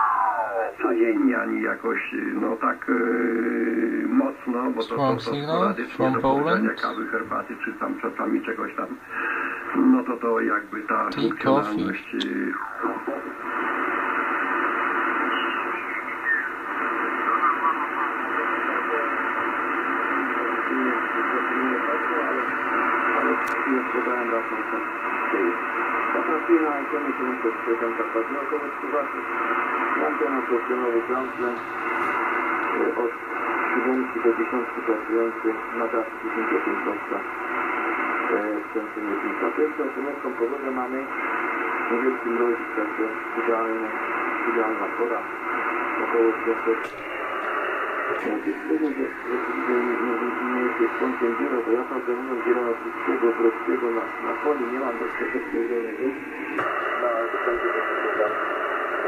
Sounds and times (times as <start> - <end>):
Radio: 0.0 - 59.0
Speech: 0.7 - 3.2, 4.0 - 9.0, 9.7 - 12.5, 38.3 - 41.2, 41.9 - 45.3, 48.2 - 56.2.